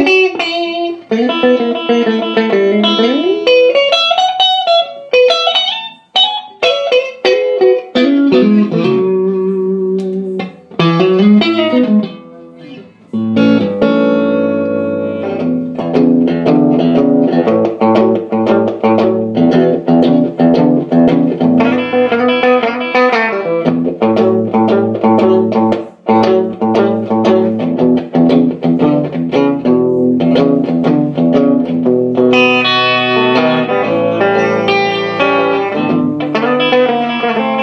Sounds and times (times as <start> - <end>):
Electric guitar: 0.0 - 37.6.